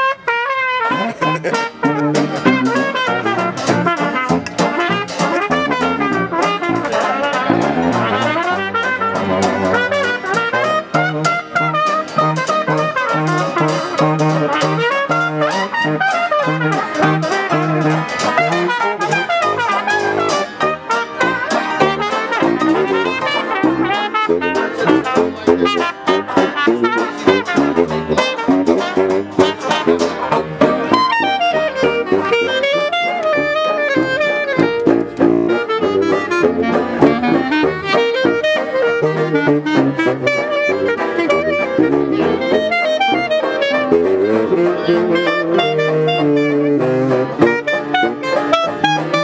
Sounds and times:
Jazz: 0.0 - 49.2
Trombone: 0.0 - 49.2
Trumpet: 0.0 - 49.2.

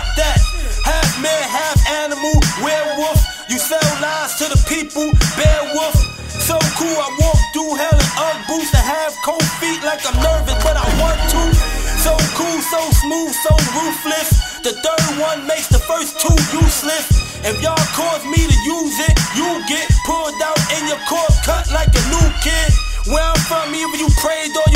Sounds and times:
Hip hop music: 0.0 - 24.7.

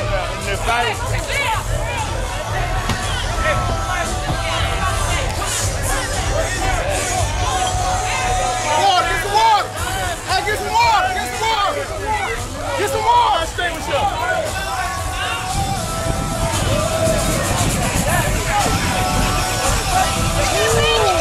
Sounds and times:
Speech: 0.0 - 15.6, 16.6 - 21.2
Music: 0.0 - 21.2.

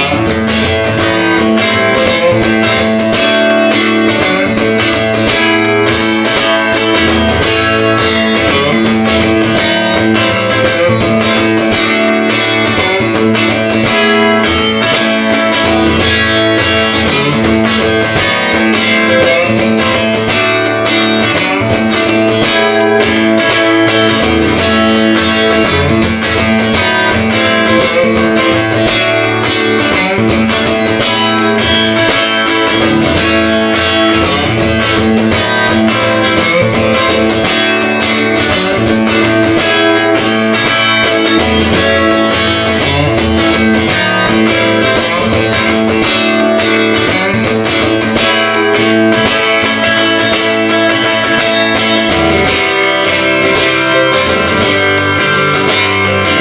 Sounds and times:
Acoustic guitar: 0.0 - 56.4
Bass guitar: 0.0 - 56.4
Strum: 0.0 - 56.4.

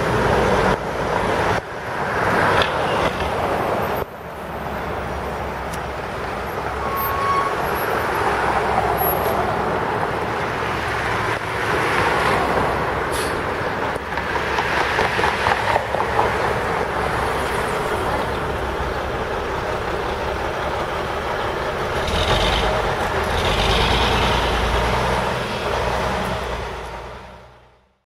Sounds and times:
Vehicle: 0.0 - 28.0.

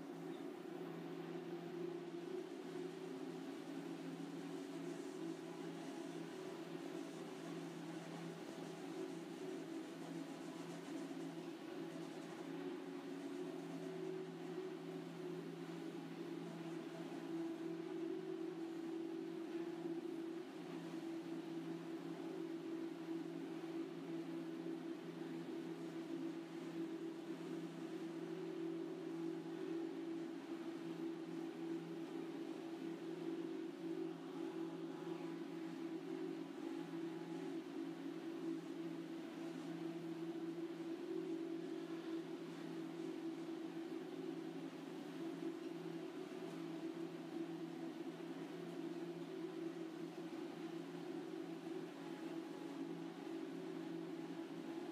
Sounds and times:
Printer: 0.0 - 54.9.

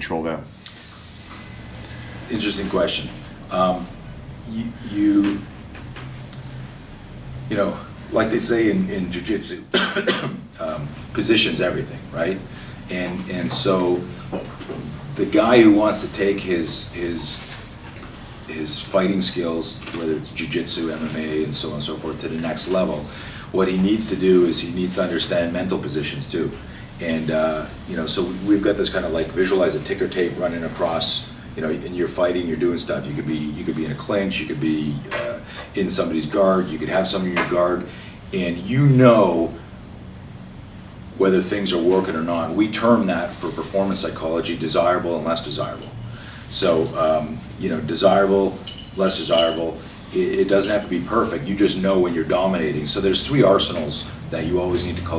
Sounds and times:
Speech: 0.0 - 0.5, 2.3 - 5.6, 7.5 - 17.6, 18.5 - 39.7, 41.1 - 55.1.

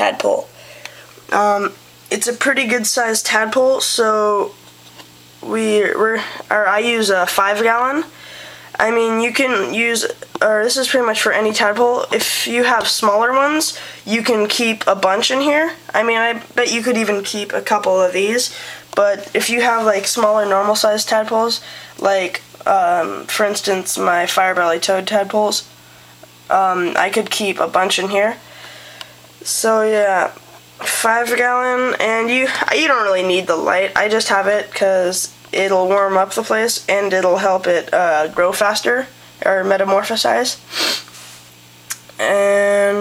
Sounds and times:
Speech: 0.0 - 0.5, 1.3 - 4.6, 5.4 - 25.7, 26.5 - 28.4, 29.4 - 40.6, 41.9 - 43.0.

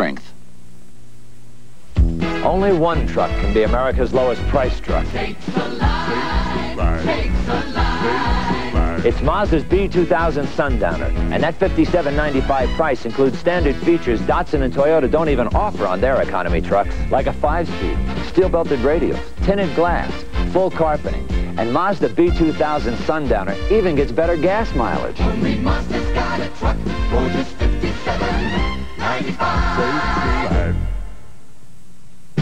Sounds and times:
Speech: 0.0 - 0.4, 2.4 - 5.1, 6.8 - 7.2, 8.8 - 25.1
Music: 1.9 - 31.3.

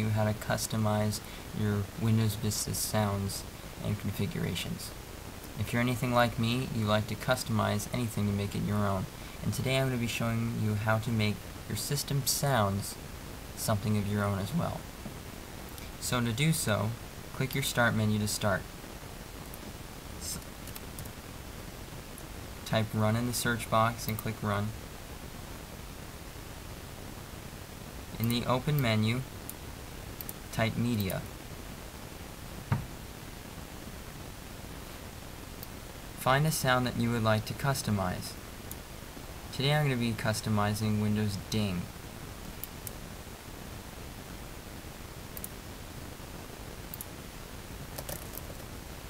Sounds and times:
Speech: 0.0 - 5.0, 5.6 - 13.0, 13.6 - 14.9, 16.0 - 18.7, 20.2 - 20.5, 22.7 - 24.8, 28.2 - 29.3, 30.5 - 31.3, 36.2 - 38.4, 39.5 - 41.9.

